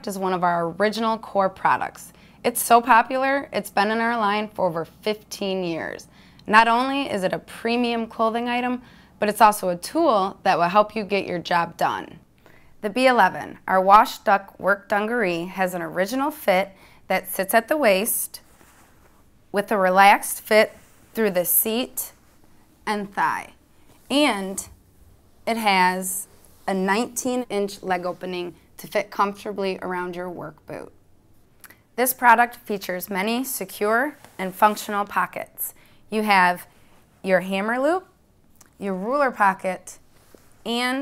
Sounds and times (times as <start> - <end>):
Speech: 0.0 - 12.2, 12.8 - 18.4, 19.6 - 22.2, 22.9 - 24.7, 25.5 - 30.9, 32.0 - 38.2, 38.8 - 40.0, 40.7 - 41.0.